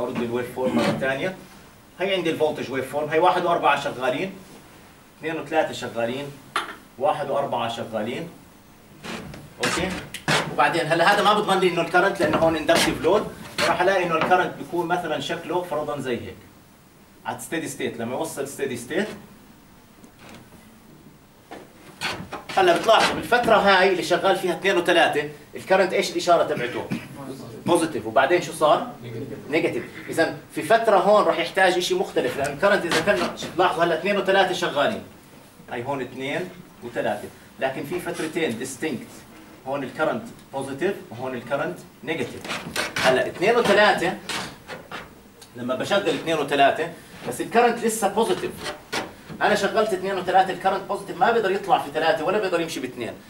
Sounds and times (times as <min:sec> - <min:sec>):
Speech: 0:00.0 - 0:01.4, 0:02.0 - 0:04.4, 0:05.2 - 0:06.4, 0:07.0 - 0:08.4, 0:09.6 - 0:16.5, 0:17.2 - 0:19.2, 0:22.5 - 0:35.1, 0:35.7 - 0:44.2, 0:45.5 - 0:48.7, 0:49.4 - 0:53.2.